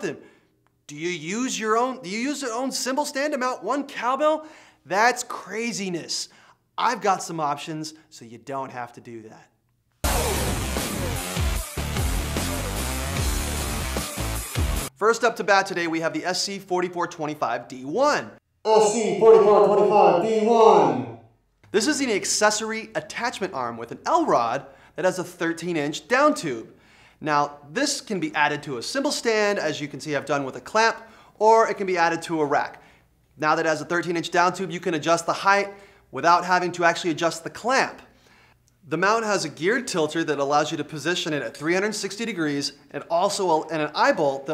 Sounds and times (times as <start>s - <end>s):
Speech: 0.0s - 0.2s, 0.9s - 9.5s, 15.0s - 32.8s, 33.4s - 38.1s, 38.9s - 44.5s
Music: 10.0s - 15.0s.